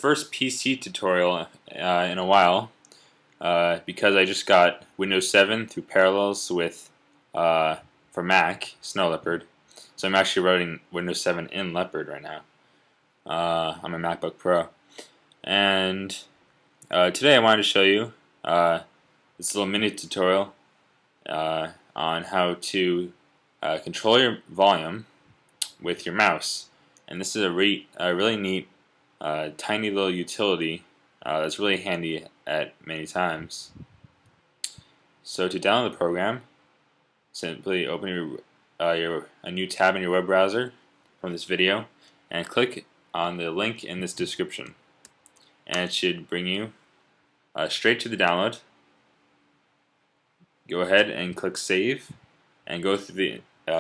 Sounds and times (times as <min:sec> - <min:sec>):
Speech: 0:00.0 - 0:02.8, 0:03.4 - 0:12.4, 0:13.3 - 0:14.8, 0:15.4 - 0:16.3, 0:16.9 - 0:20.6, 0:21.3 - 0:33.9, 0:34.7 - 0:36.5, 0:37.4 - 0:44.8, 0:45.7 - 0:46.8, 0:47.6 - 0:48.7, 0:50.7 - 0:53.8.